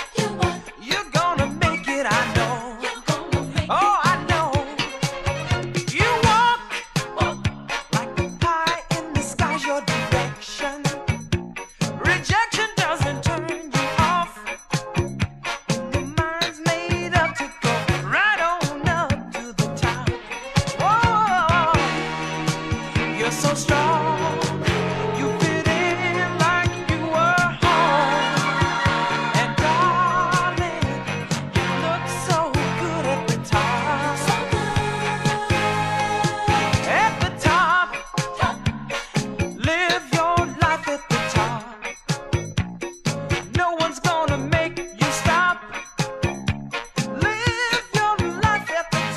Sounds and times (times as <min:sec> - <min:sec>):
Disco: 0:00.0 - 0:49.1.